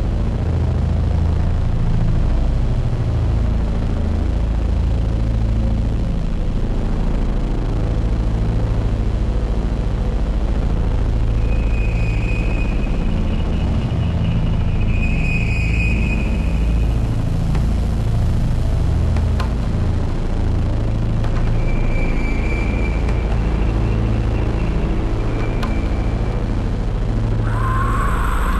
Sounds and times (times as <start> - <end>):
Music: 0.0 - 28.5.